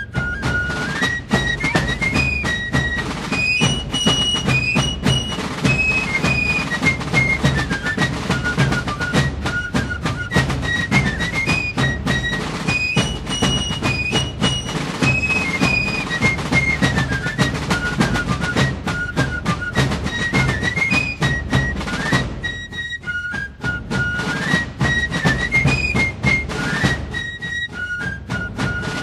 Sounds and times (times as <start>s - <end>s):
Music: 0.0s - 29.0s.